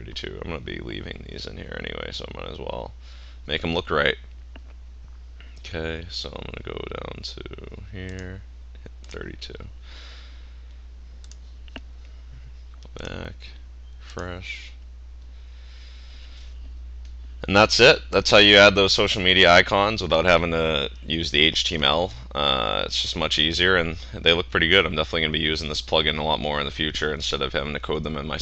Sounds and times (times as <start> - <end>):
Speech: 0.0 - 4.2, 5.6 - 9.7, 12.9 - 14.8, 17.4 - 28.4
Clicking: 8.1 - 8.4, 9.0 - 9.2, 10.7 - 11.9.